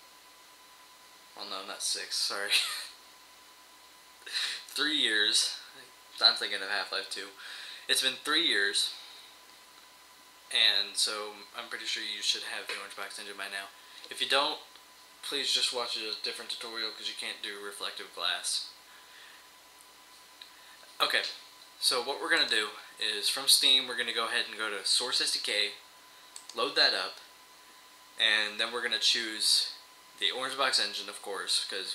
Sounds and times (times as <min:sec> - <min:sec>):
Speech: 0:01.4 - 0:03.0, 0:04.3 - 0:09.0, 0:10.5 - 0:18.8, 0:21.0 - 0:25.8, 0:26.4 - 0:27.3, 0:28.2 - 0:31.9.